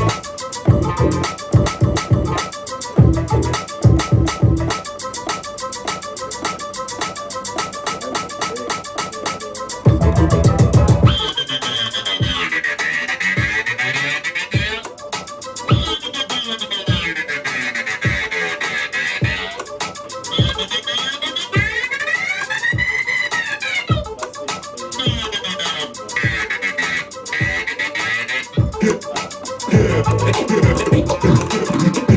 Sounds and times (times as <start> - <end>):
Electronic music: 0.0 - 32.1
Scratching (performance technique): 0.0 - 32.1
Speech: 7.3 - 12.6, 23.3 - 32.1.